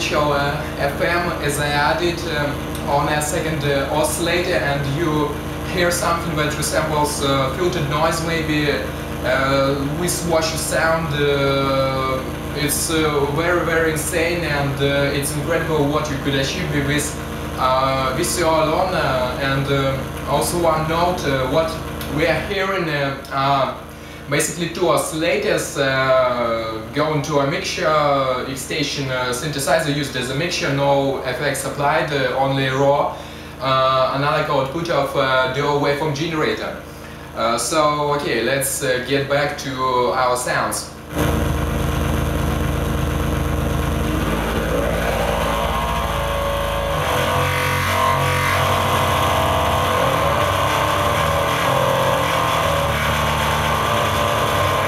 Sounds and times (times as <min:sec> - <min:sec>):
Race car, auto racing: 0:44.1 - 0:54.8.